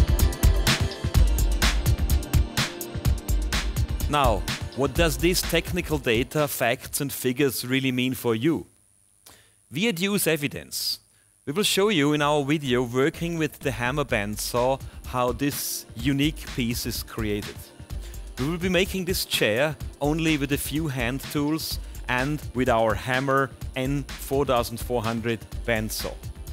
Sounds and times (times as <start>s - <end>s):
Music: 0.0s - 7.4s, 11.8s - 26.5s
Speech: 4.1s - 8.7s, 9.7s - 17.7s, 18.4s - 26.2s.